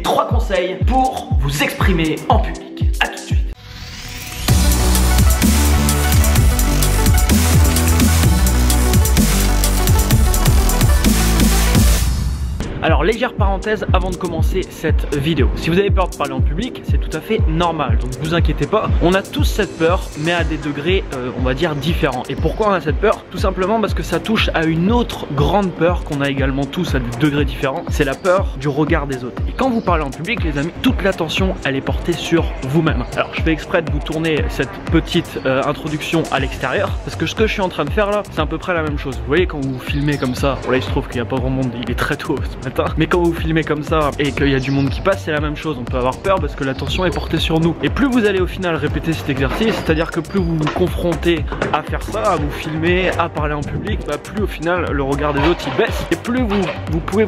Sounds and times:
Speech: 0:00.0 - 0:03.6, 0:12.8 - 0:57.2
Music: 0:00.0 - 0:57.2.

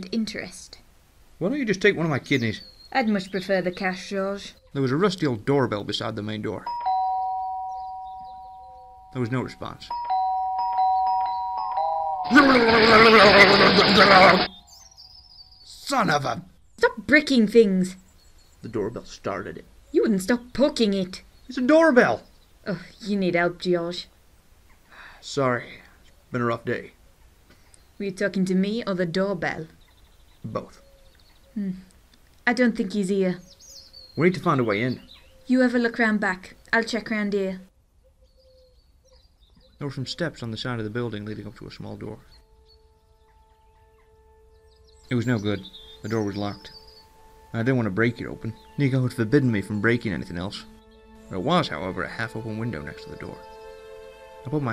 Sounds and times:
Ding-dong: 0:06.7 - 0:09.2, 0:09.9 - 0:12.4.

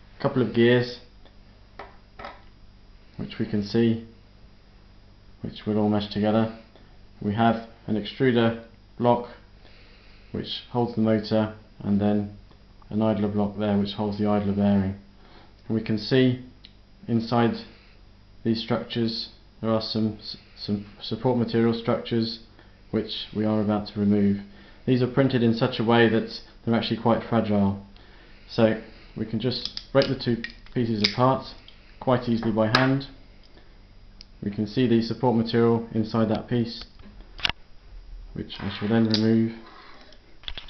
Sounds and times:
Speech: 0:00.2 - 0:01.1, 0:03.2 - 0:04.2, 0:05.4 - 0:09.5, 0:10.3 - 0:15.1, 0:15.7 - 0:17.8, 0:18.4 - 0:27.9, 0:28.5 - 0:33.2, 0:34.4 - 0:36.9, 0:38.4 - 0:40.1.

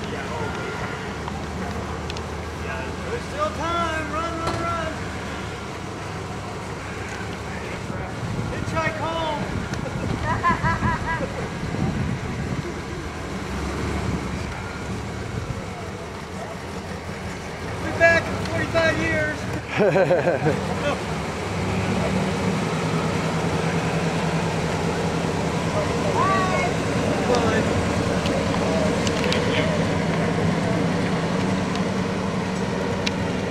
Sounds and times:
Bus: 0:00.0 - 0:33.5
Speech: 0:02.6 - 0:05.0, 0:17.8 - 0:19.5.

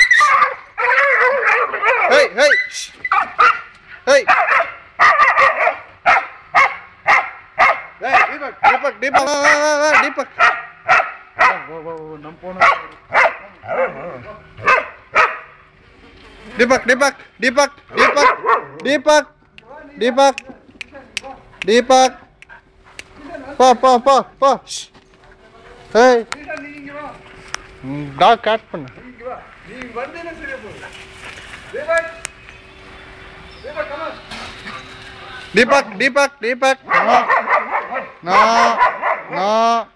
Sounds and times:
Bow-wow: 0:00.0 - 0:02.4, 0:03.1 - 0:11.7, 0:12.6 - 0:15.5, 0:17.9 - 0:18.8, 0:36.8 - 0:39.5.

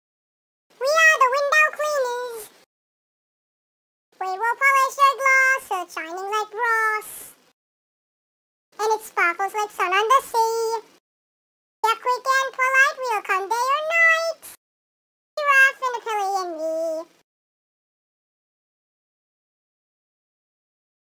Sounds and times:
Inside, small room: 0:00.7 - 0:02.7, 0:04.2 - 0:07.6, 0:08.8 - 0:11.0, 0:11.8 - 0:14.6, 0:15.4 - 0:17.3.

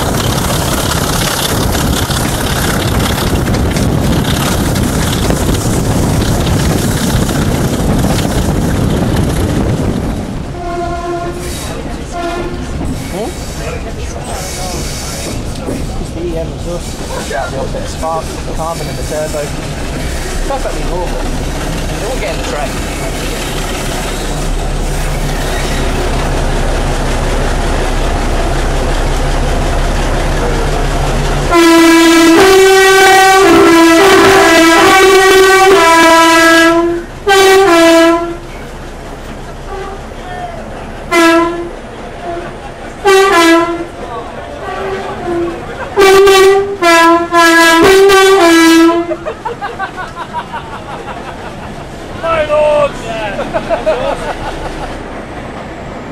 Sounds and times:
Railroad car, train wagon: 0:00.0 - 0:56.1
Train horn: 0:10.5 - 0:12.7, 0:31.5 - 0:38.5, 0:39.7 - 0:40.3, 0:41.1 - 0:44.0, 0:44.6 - 0:49.2.

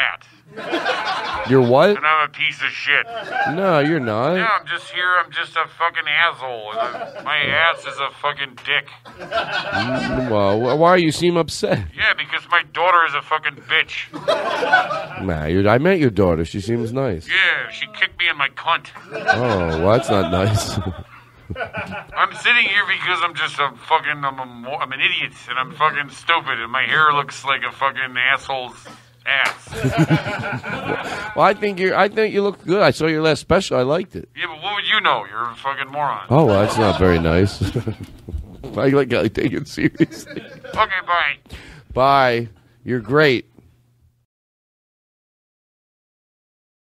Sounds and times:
Speech: 0:01.5 - 0:09.0, 0:15.2 - 0:21.0, 0:22.2 - 0:29.7, 0:31.4 - 0:37.6, 0:42.0 - 0:43.5.

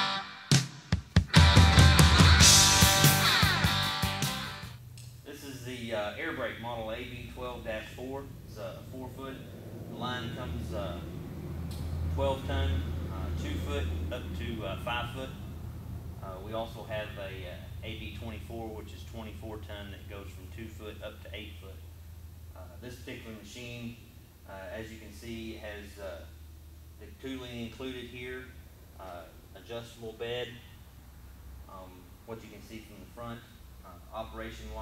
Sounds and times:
Speech: 0:05.3 - 0:11.1, 0:12.1 - 0:15.5, 0:16.2 - 0:21.8, 0:22.6 - 0:26.3, 0:27.0 - 0:30.7, 0:31.7 - 0:34.8.

